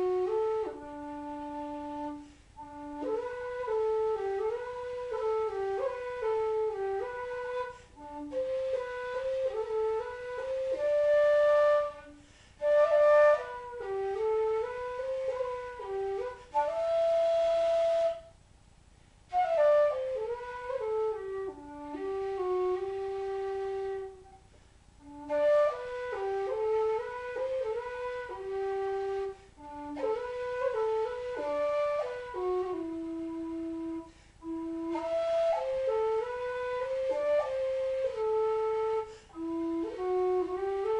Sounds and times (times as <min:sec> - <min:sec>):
Music: 0:00.0 - 0:18.4, 0:19.3 - 0:40.9.